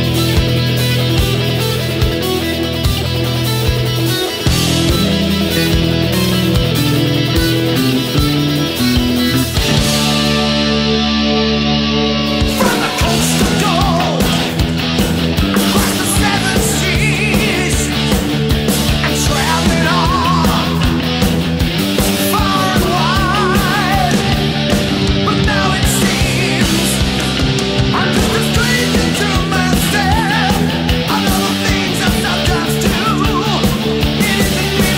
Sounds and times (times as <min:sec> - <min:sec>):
Electric guitar: 0:00.0 - 0:34.9.